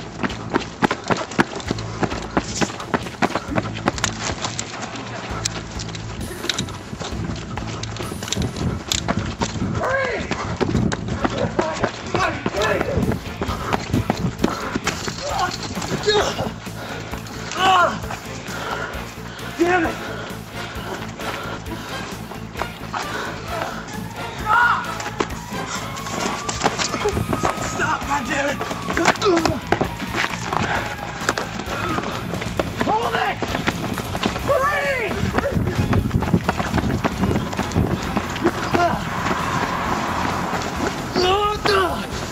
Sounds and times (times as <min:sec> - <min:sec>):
Music: 0:00.0 - 0:42.3
Run: 0:00.0 - 0:42.3.